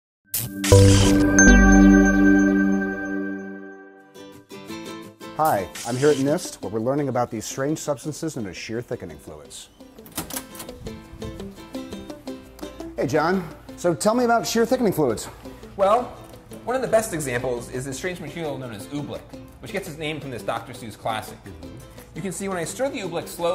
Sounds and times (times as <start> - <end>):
Music: 0.3 - 23.5
Speech: 5.4 - 9.7, 13.0 - 23.5.